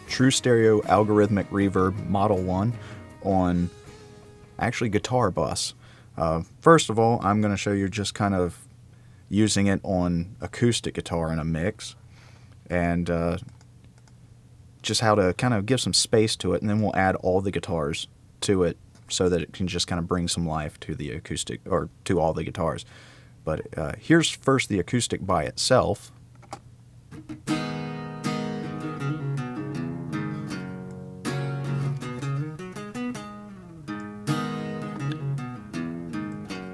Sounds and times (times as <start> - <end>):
Speech: 0.1 - 3.7, 4.6 - 8.7, 9.3 - 12.0, 12.7 - 13.5, 14.8 - 26.2.